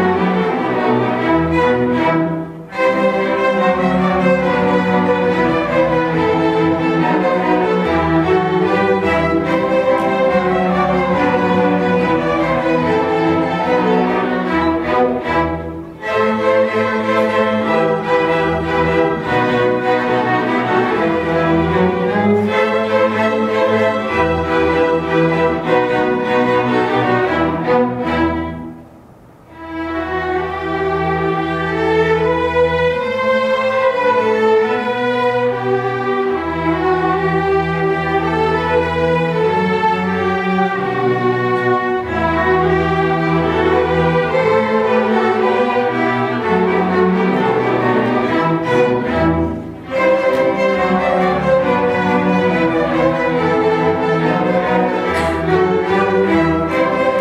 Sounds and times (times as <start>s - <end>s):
Orchestra: 0.0s - 57.2s.